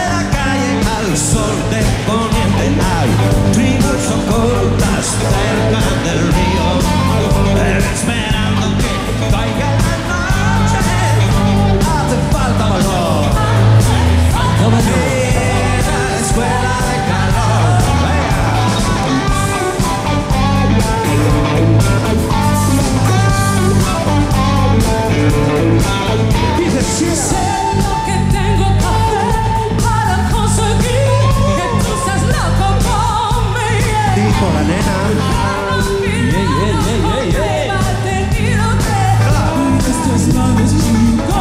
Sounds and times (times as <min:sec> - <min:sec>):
Music: 0:00.0 - 0:41.4.